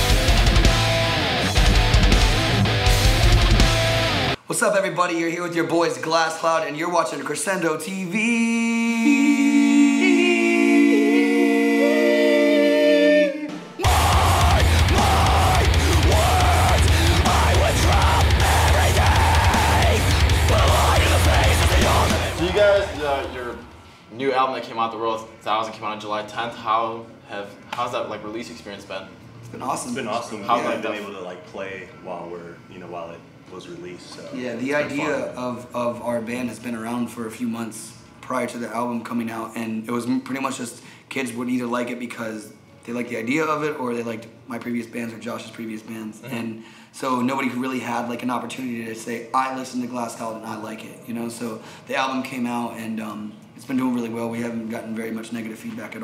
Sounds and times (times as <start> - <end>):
Speech: 4.5 - 9.0, 22.4 - 56.0.